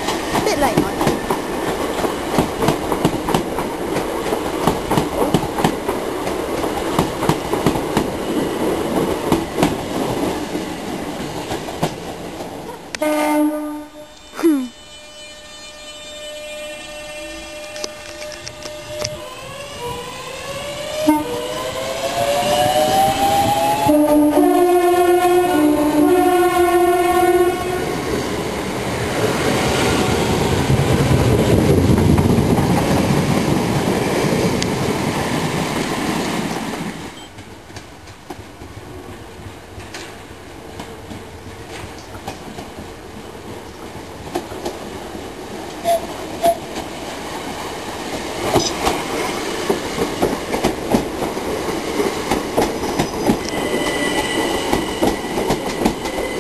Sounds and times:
Railroad car, train wagon: 0.0s - 56.4s
Train whistle: 12.9s - 28.2s, 45.8s - 46.8s, 53.4s - 56.4s.

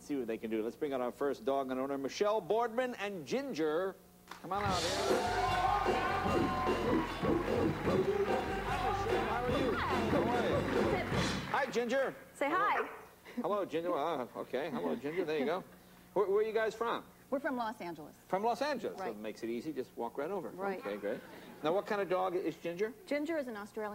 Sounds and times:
Music: 4.6s - 11.6s.

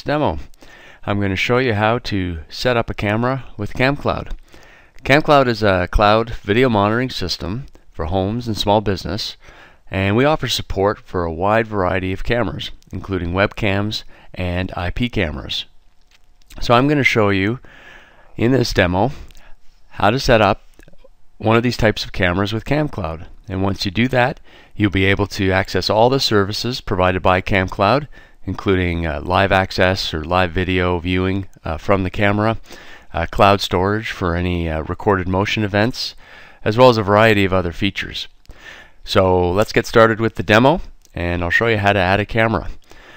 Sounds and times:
Speech: 0.0s - 4.4s, 5.0s - 15.7s, 16.5s - 17.6s, 18.4s - 19.3s, 20.0s - 38.3s, 39.0s - 42.8s.

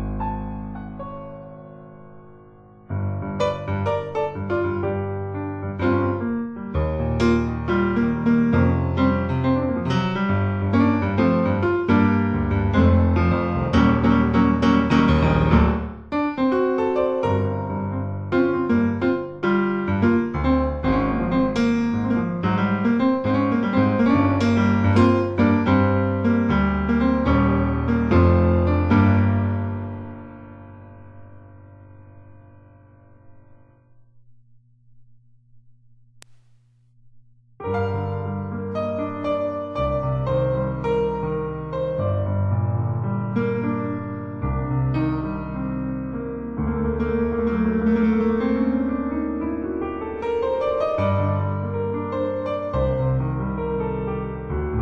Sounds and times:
Electric piano: 0.0s - 33.8s, 37.6s - 54.8s.

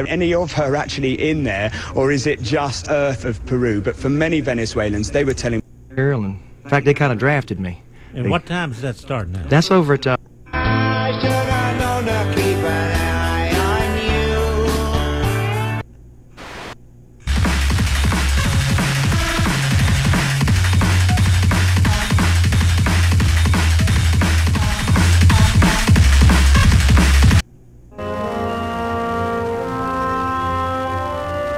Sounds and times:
Music: 10.5s - 15.8s, 17.3s - 31.5s.

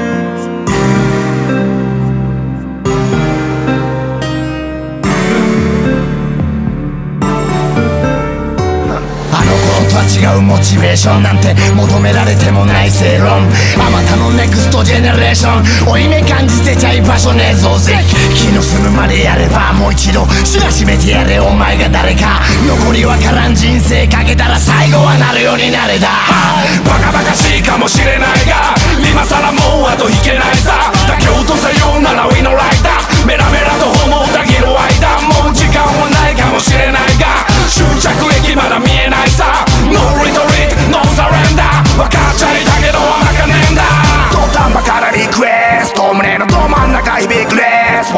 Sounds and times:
Grunge: 5.0s - 48.1s.

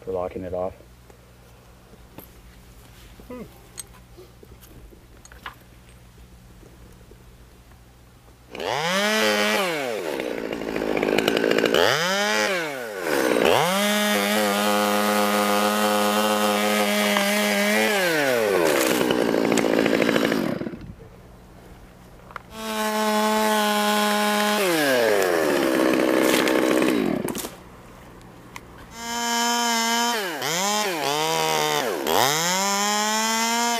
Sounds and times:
Chainsaw: 8.5s - 20.9s, 22.5s - 27.6s, 28.9s - 33.7s.

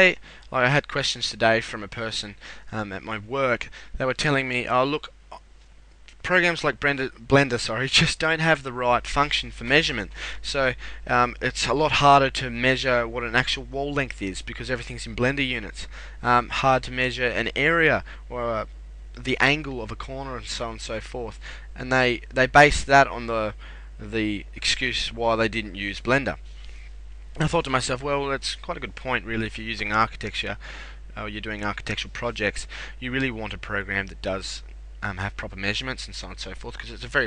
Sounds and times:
Speech: 0.0s - 5.4s, 6.1s - 26.4s, 27.4s - 30.6s, 31.2s - 37.2s.

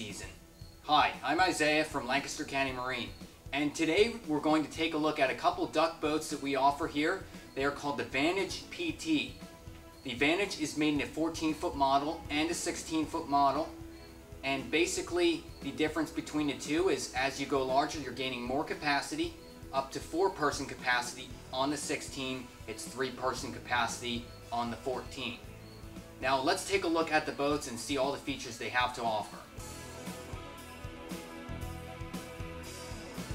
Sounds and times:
Speech: 0.0s - 9.4s, 10.0s - 13.8s, 14.4s - 25.5s, 26.2s - 29.5s
Music: 0.0s - 33.3s.

